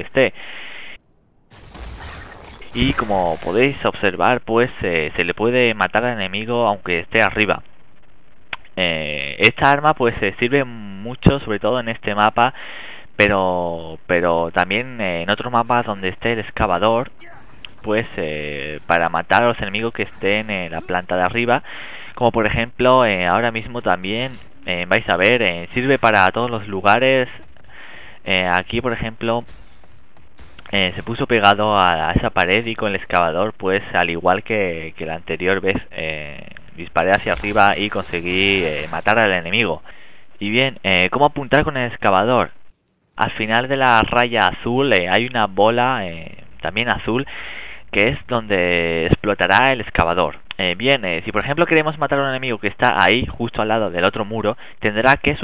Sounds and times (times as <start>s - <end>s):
Speech: 2.8s - 7.6s, 8.8s - 12.5s, 13.2s - 21.6s, 22.2s - 27.5s, 28.2s - 29.5s, 30.7s - 42.5s, 43.2s - 47.3s, 47.9s - 55.4s.